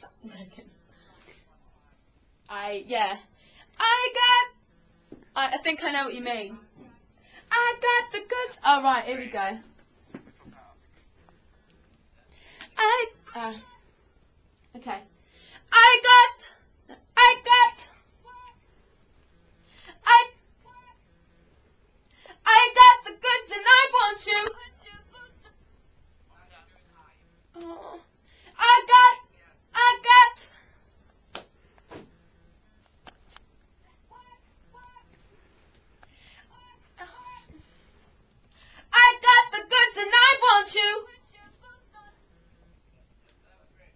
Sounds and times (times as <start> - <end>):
Hands: 31.3 - 32.1.